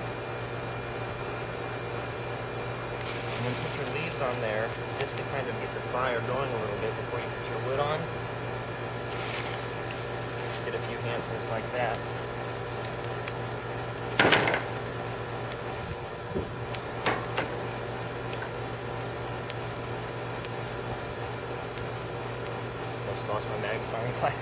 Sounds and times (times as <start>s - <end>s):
Fire: 0.0s - 24.4s.